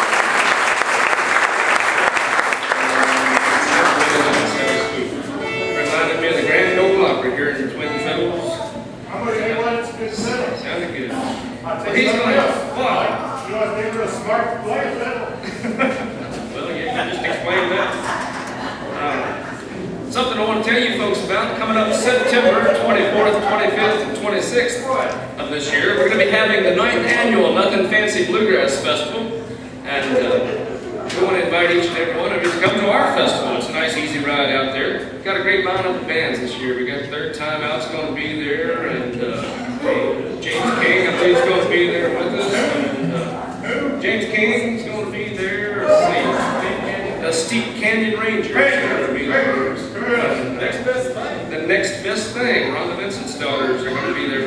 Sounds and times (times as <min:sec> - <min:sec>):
Speech: 0:03.5 - 0:54.4.